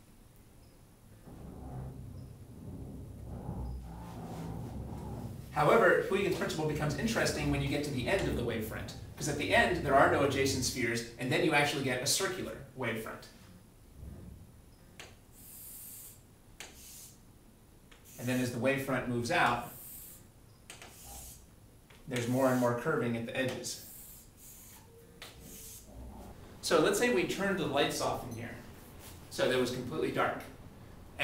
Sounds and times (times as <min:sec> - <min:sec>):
Speech: 0:05.6 - 0:13.3, 0:18.2 - 0:19.7, 0:22.1 - 0:23.8, 0:26.6 - 0:28.6, 0:29.3 - 0:30.6.